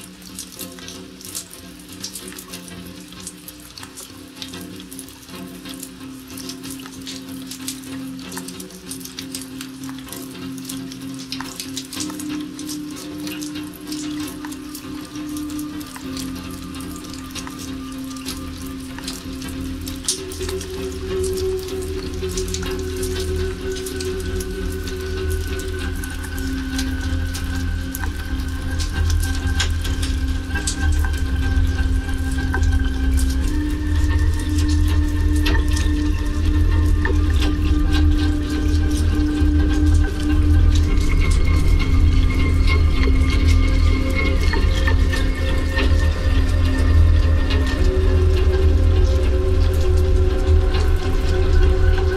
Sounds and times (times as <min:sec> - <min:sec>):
Music: 0:00.0 - 0:52.1
Raindrop: 0:00.0 - 0:52.1.